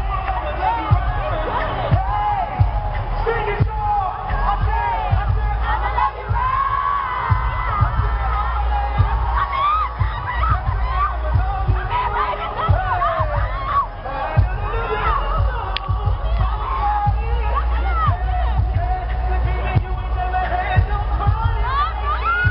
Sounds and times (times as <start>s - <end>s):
Music: 0.0s - 22.5s.